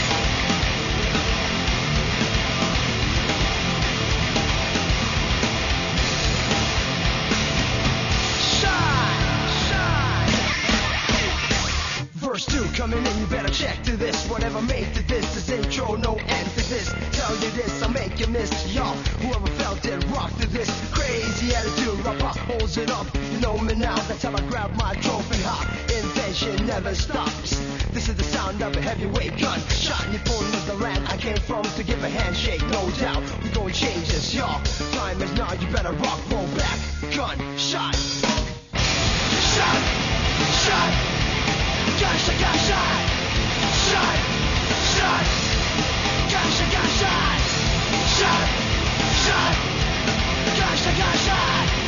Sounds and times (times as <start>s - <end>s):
Music: 0.0s - 51.8s.